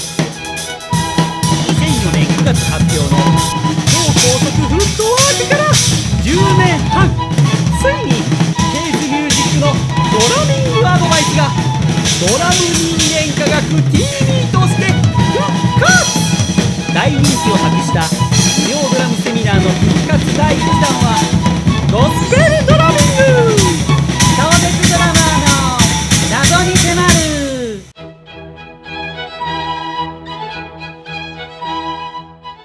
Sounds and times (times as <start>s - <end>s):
Drum kit: 0.0s - 28.0s
Bass drum: 1.0s - 27.9s
Speech: 1.4s - 21.3s, 21.9s - 27.9s.